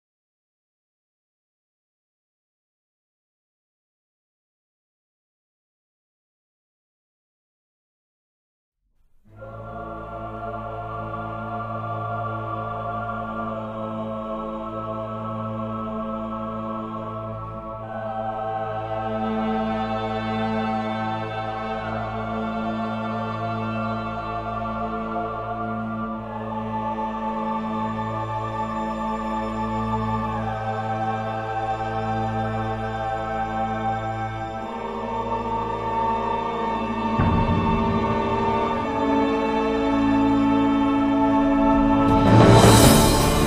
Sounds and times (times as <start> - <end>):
Music: 8.8 - 43.4.